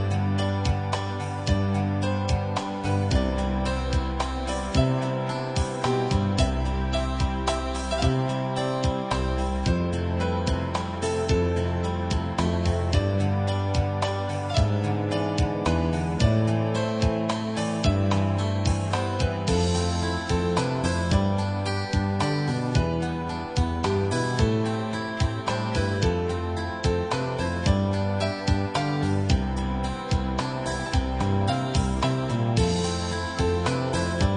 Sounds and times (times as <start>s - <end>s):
Music: 0.0s - 34.3s.